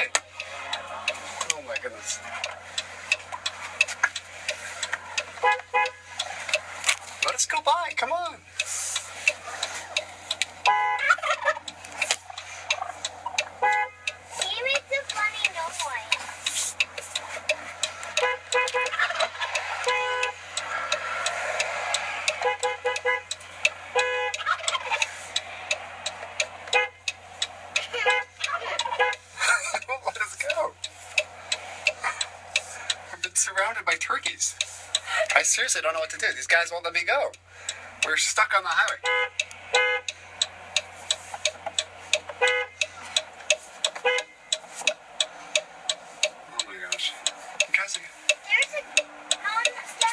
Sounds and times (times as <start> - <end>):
Gobble: 11.0 - 11.7, 12.8 - 13.5, 18.8 - 19.8, 24.4 - 25.2, 28.4 - 29.2.